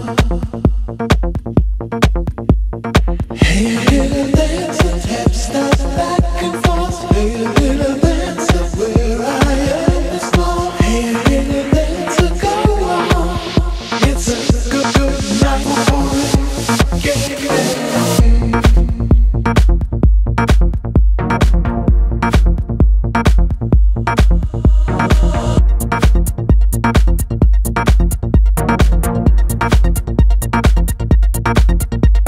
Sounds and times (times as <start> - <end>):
Music: 0.0 - 32.2.